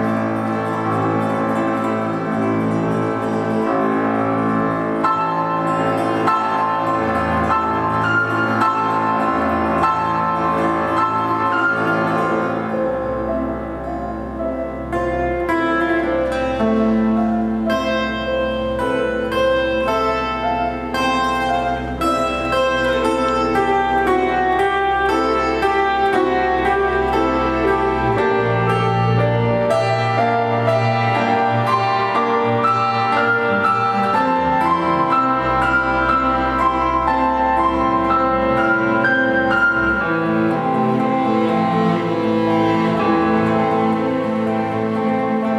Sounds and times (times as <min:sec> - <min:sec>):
Piano: 0:00.0 - 0:45.5.